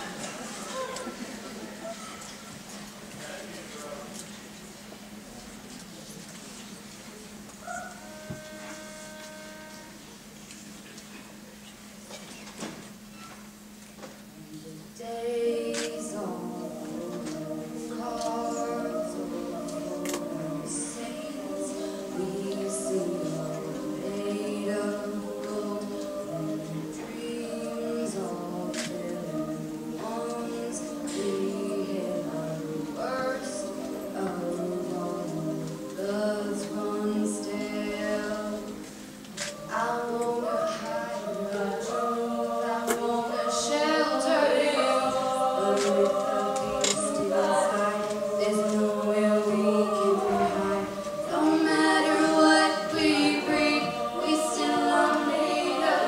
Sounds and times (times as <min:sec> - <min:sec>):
Choir: 0:00.0 - 0:02.6, 0:07.6 - 0:10.2, 0:15.0 - 0:56.0.